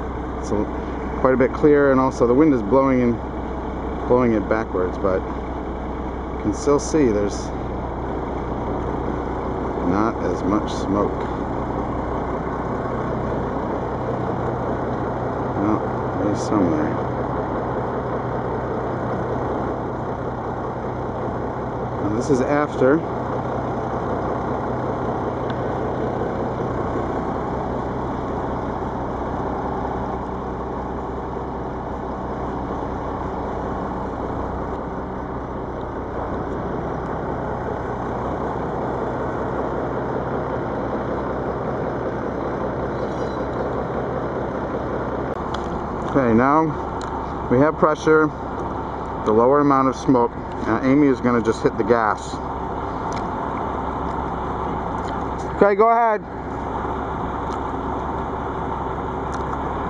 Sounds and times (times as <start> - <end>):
Car: 0.0 - 59.8
Outside, rural or natural: 0.0 - 59.8
Speech: 0.4 - 3.2, 4.1 - 5.3, 6.4 - 7.6, 9.8 - 11.3, 15.6 - 17.0, 22.0 - 23.1, 46.1 - 46.8, 47.5 - 48.4, 49.3 - 52.4, 55.4 - 56.3.